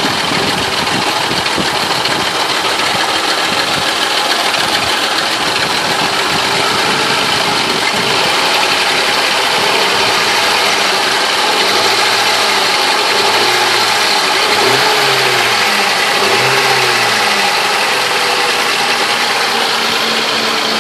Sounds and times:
Engine: 0:00.0 - 0:20.8
Vibration: 0:00.0 - 0:20.8.

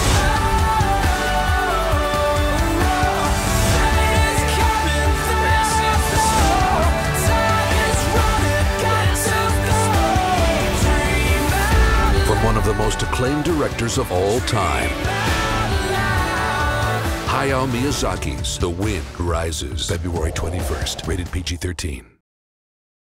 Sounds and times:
Music: 0:00.0 - 0:22.0
Speech: 0:12.2 - 0:15.0, 0:17.3 - 0:22.2.

